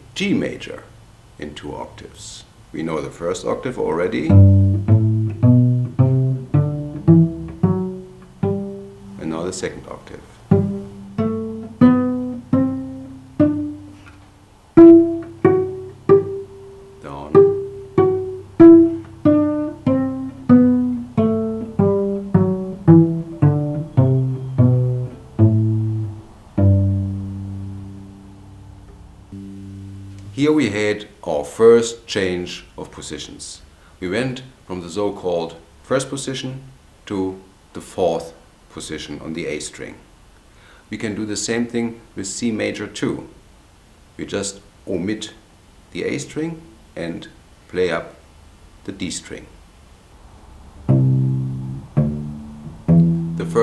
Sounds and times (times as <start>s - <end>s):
Speech: 0.1s - 4.4s, 9.2s - 10.3s, 17.0s - 17.4s, 30.3s - 40.1s, 40.9s - 43.4s, 44.2s - 48.2s, 48.9s - 49.6s, 53.4s - 53.6s.